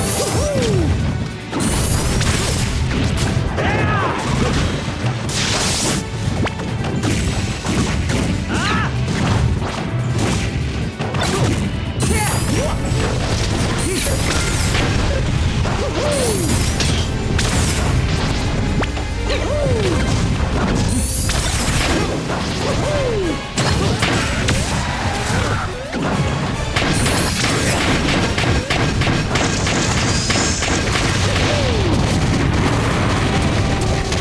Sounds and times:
Smash, crash: 0.0s - 19.0s, 19.7s - 34.2s.

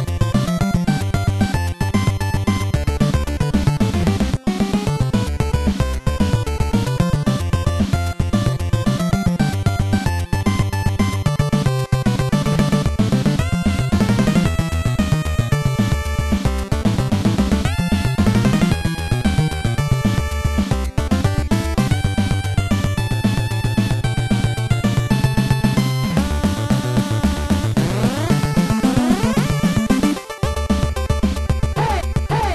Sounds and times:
Soundtrack music: 0.2s - 32.5s.

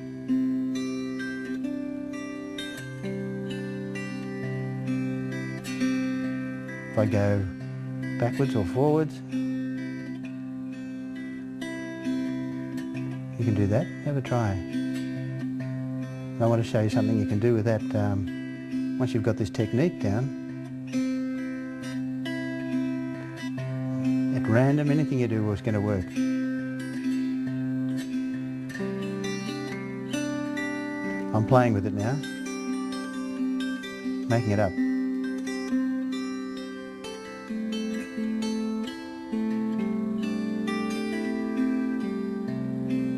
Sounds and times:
Harp: 0.0s - 43.1s
Strum: 0.0s - 43.1s.

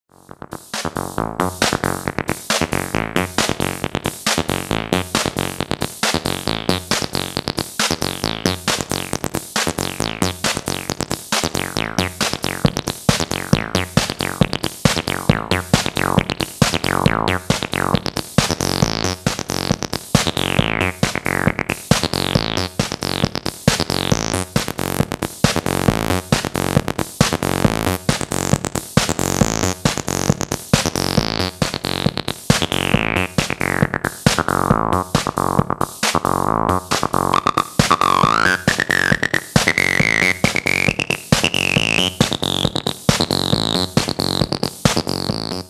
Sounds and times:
Drum machine: 0.1s - 45.6s.

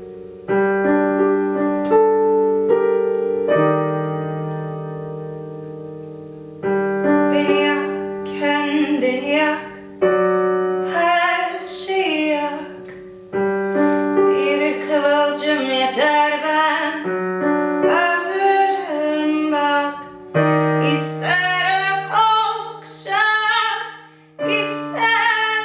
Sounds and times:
Music: 0.0s - 25.6s.

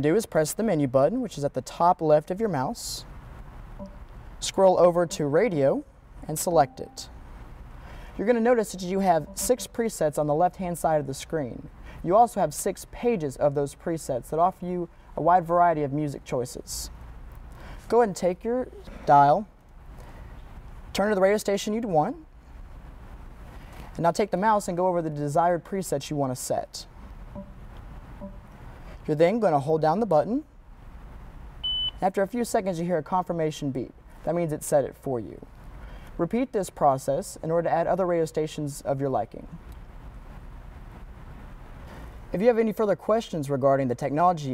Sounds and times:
Speech: 0.0s - 3.1s, 4.4s - 7.1s, 8.2s - 16.9s, 17.9s - 19.5s, 21.0s - 22.3s, 24.0s - 26.9s, 29.1s - 30.5s, 32.0s - 35.5s, 36.2s - 39.6s, 42.4s - 44.5s.

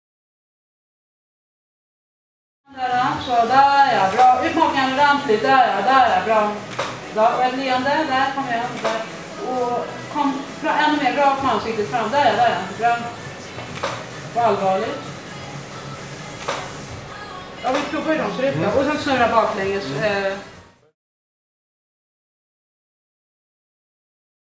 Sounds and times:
Speech: 2.7s - 6.6s, 14.4s - 15.0s, 17.6s - 20.5s
Music: 2.7s - 21.0s.

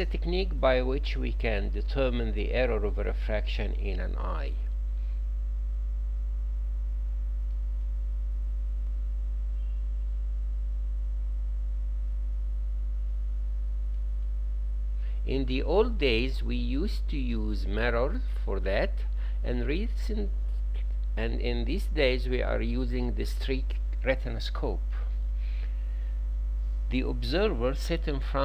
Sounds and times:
Speech: 0.0s - 4.7s, 15.3s - 20.4s, 21.2s - 25.1s, 26.9s - 28.4s.

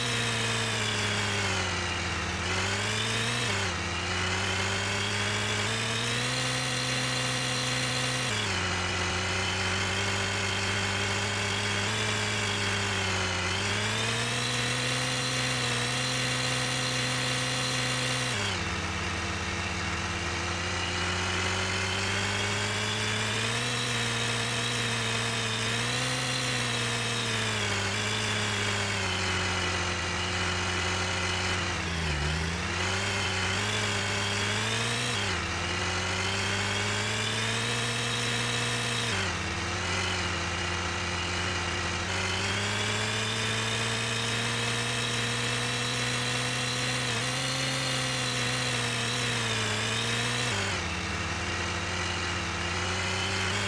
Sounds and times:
Car: 0.0s - 53.6s.

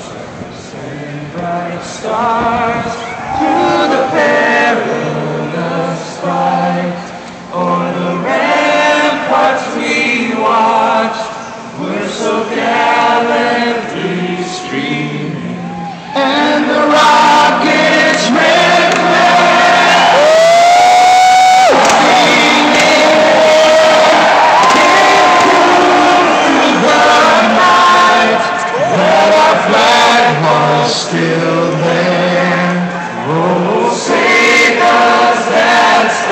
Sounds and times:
Male singing: 0.0s - 19.9s, 21.7s - 36.3s
Choir: 0.0s - 36.3s.

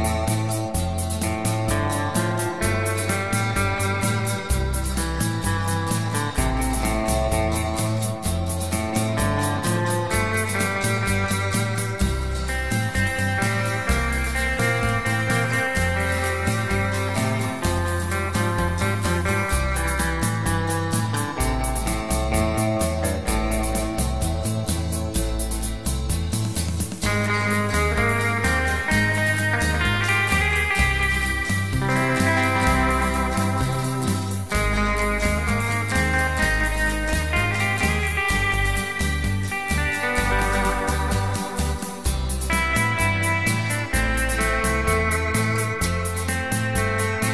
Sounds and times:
Inside, small room: 0.0s - 47.3s
Steel guitar, slide guitar: 0.0s - 47.3s.

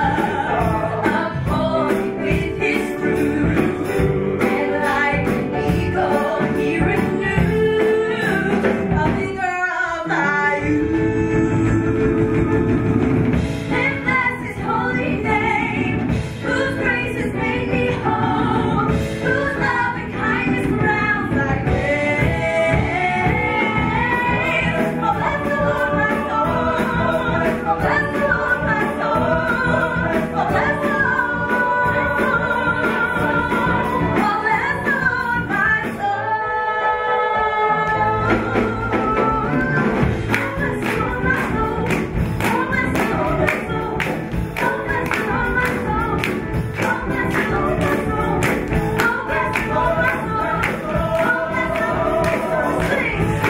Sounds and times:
Inside, large room or hall: 0.0s - 53.5s
Music: 0.0s - 53.5s
Singing: 0.0s - 53.5s.

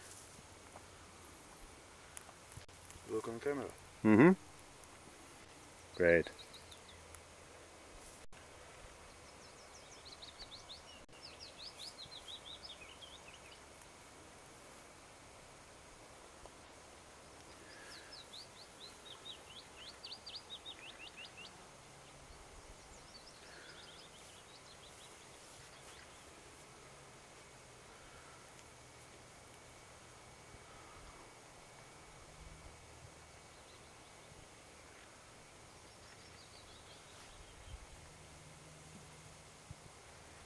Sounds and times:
Outside, rural or natural: 0.0s - 40.4s
Speech: 3.0s - 4.4s, 6.0s - 6.4s.

